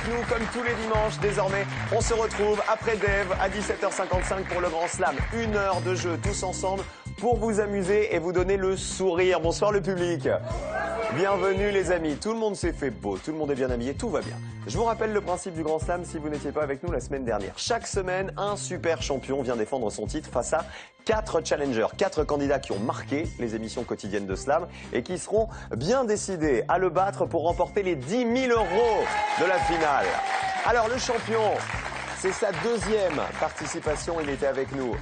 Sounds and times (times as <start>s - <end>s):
Music: 0.0s - 35.0s
Speech: 0.0s - 35.0s.